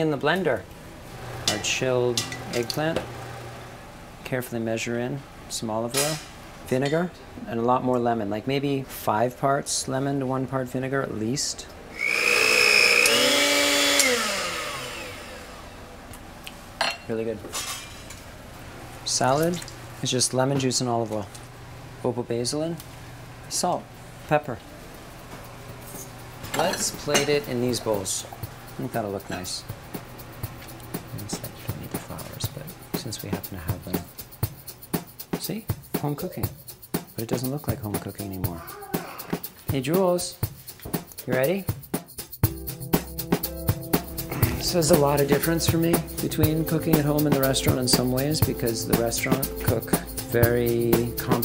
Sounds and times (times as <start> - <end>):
Blender: 12.0 - 15.7.